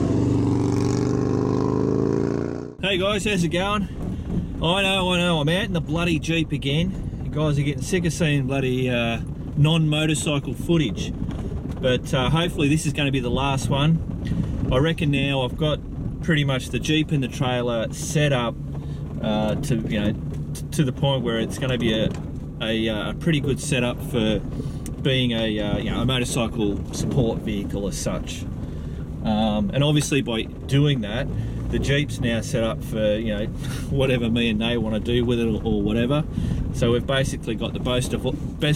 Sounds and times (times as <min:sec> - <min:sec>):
Speech: 0:02.8 - 0:03.9, 0:04.6 - 0:11.1, 0:11.8 - 0:14.0, 0:14.7 - 0:18.6, 0:19.2 - 0:24.4, 0:25.0 - 0:28.5, 0:29.2 - 0:38.7.